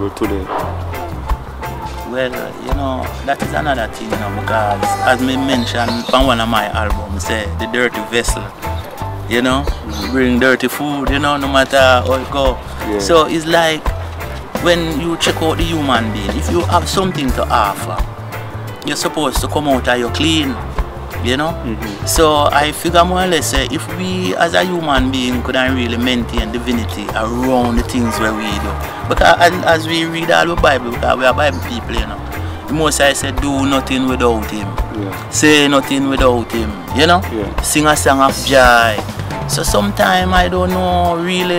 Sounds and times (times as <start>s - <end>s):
Speech: 0.0s - 0.5s, 2.1s - 8.5s, 9.3s - 13.8s, 14.6s - 18.0s, 18.8s - 20.6s, 21.2s - 41.5s
Music: 0.0s - 41.5s.